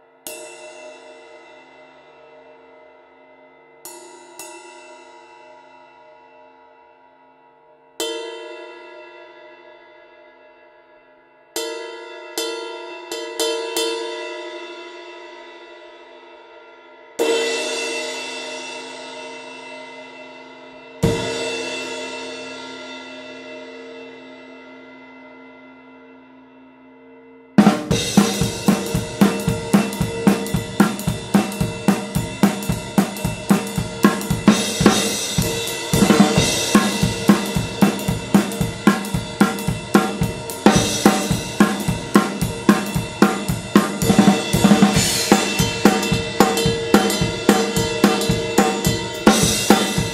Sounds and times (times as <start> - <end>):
Cymbal: 0.0 - 50.1.